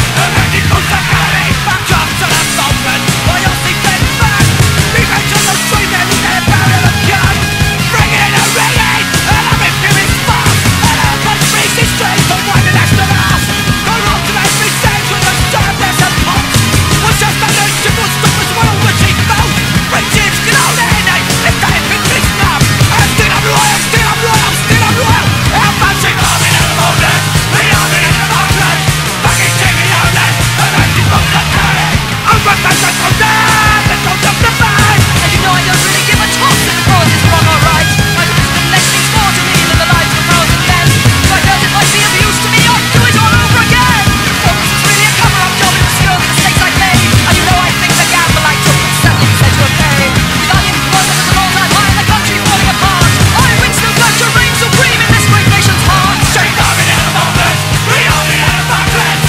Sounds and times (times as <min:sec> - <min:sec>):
Music: 0:00.0 - 0:59.2.